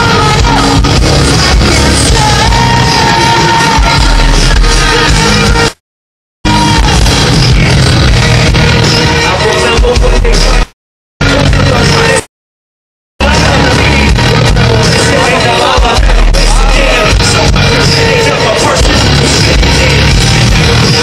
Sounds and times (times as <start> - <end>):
Rock music: 0.0 - 5.8, 6.4 - 12.3, 13.2 - 21.0.